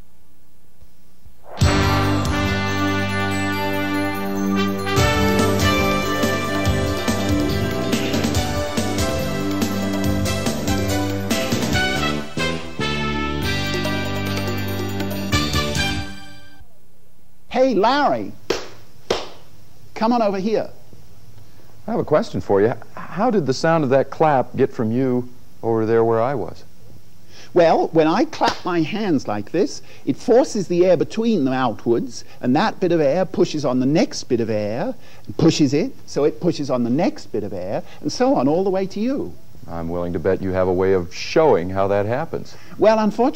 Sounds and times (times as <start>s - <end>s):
Speech: 17.5s - 18.4s, 20.0s - 20.8s, 21.9s - 26.7s, 27.6s - 43.3s.